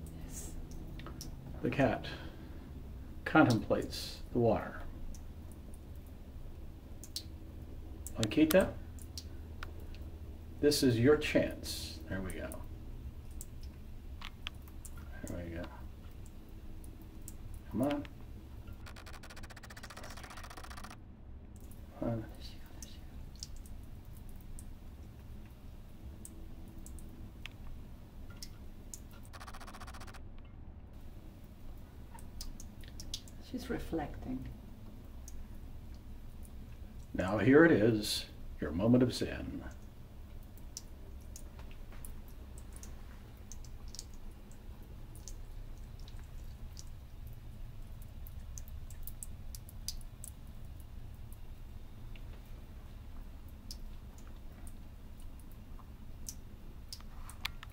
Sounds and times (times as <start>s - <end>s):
Speech: 1.6s - 2.2s, 3.3s - 4.9s, 8.2s - 8.8s, 10.6s - 12.7s, 15.1s - 15.8s, 17.7s - 18.1s, 22.0s - 23.0s, 33.4s - 34.5s, 37.2s - 39.8s.